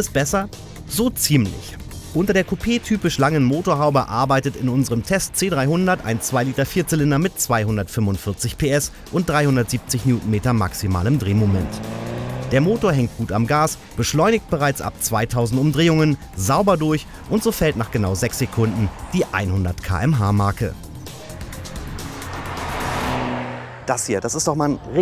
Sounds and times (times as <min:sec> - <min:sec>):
Speech: 0:00.0 - 0:11.8, 0:12.5 - 0:20.8, 0:23.9 - 0:25.0
Music: 0:00.0 - 0:23.4.